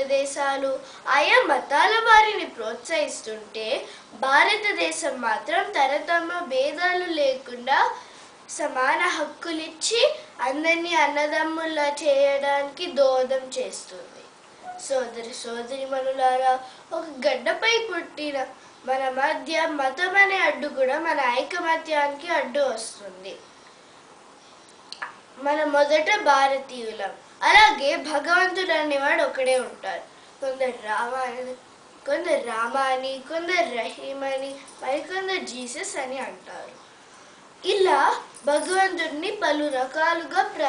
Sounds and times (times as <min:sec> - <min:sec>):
Female speech, woman speaking: 0:00.0 - 0:08.0, 0:08.6 - 0:23.4, 0:25.4 - 0:36.8, 0:37.6 - 0:40.6
Narration, monologue: 0:00.0 - 0:40.6.